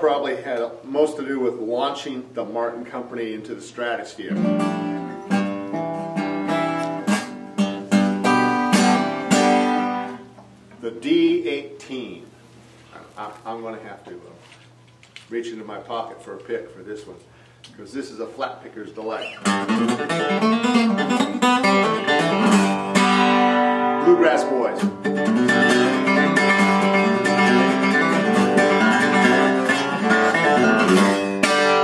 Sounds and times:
Speech: 0.0 - 4.4, 10.8 - 12.3, 12.9 - 14.5, 15.3 - 19.4, 24.0 - 24.9
Music: 4.3 - 10.3, 19.4 - 31.8.

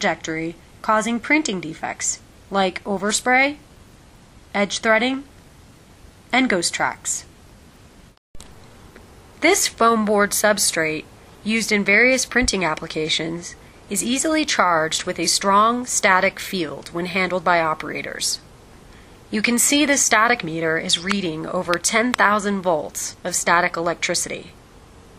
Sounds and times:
Speech: 0.0 - 3.6, 4.5 - 5.3, 6.3 - 7.3, 9.4 - 18.4, 19.3 - 24.6.

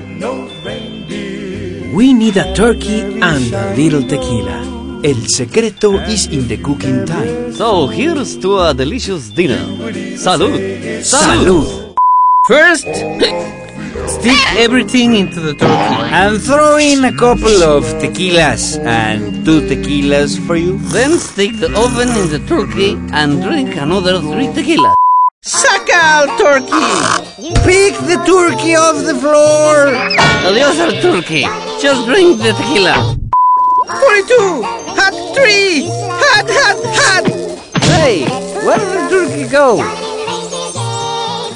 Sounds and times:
Music: 0.0 - 24.9, 25.5 - 33.2, 33.8 - 41.5
Speech: 2.0 - 11.7, 12.5 - 13.0, 14.1 - 33.1, 33.9 - 39.9.

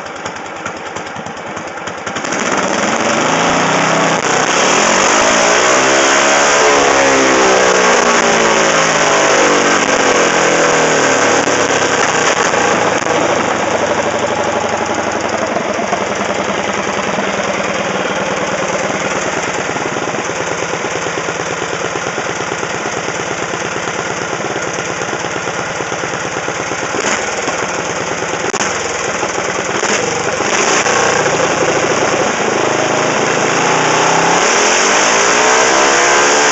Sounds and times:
Outside, urban or manmade: 0.0 - 36.5
Vehicle: 0.0 - 36.5.

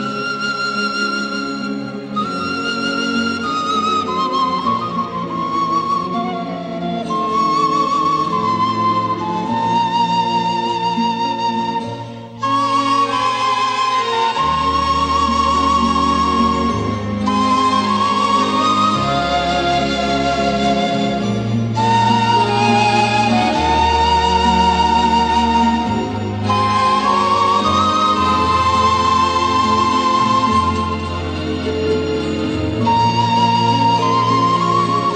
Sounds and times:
Wedding music: 0.0 - 35.1.

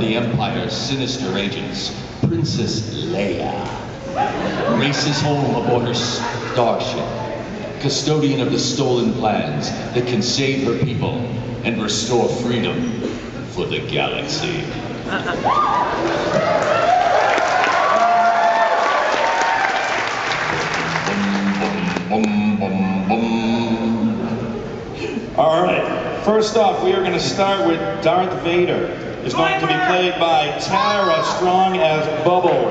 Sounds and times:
Speech: 0.0 - 3.8, 4.6 - 14.8, 25.4 - 32.7.

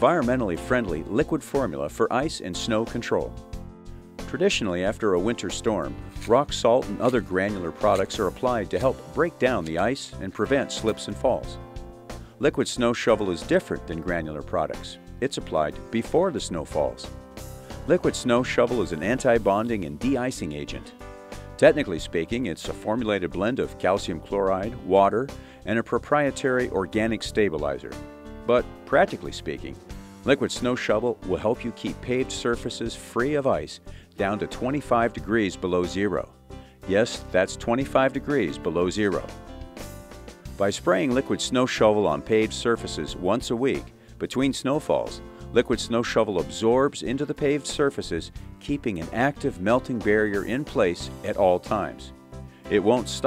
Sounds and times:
Speech: 0.0 - 3.4, 4.3 - 11.6, 12.4 - 17.1, 17.9 - 20.9, 21.6 - 36.3, 36.9 - 39.3, 40.6 - 52.1, 52.7 - 53.2
Music: 0.0 - 53.2.

